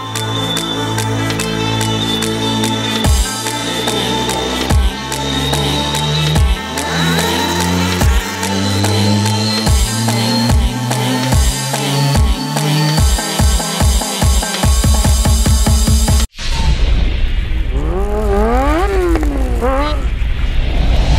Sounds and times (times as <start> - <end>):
Music: 0.0 - 16.3.